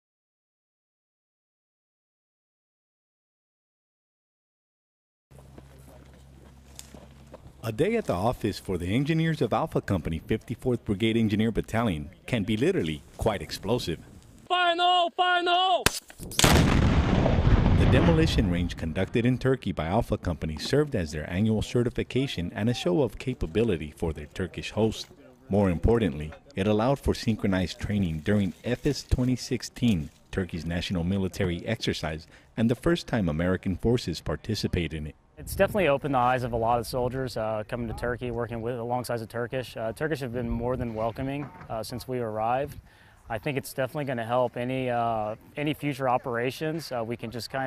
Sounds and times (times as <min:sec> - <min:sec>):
Speech: 0:07.6 - 0:15.9, 0:17.8 - 0:47.6.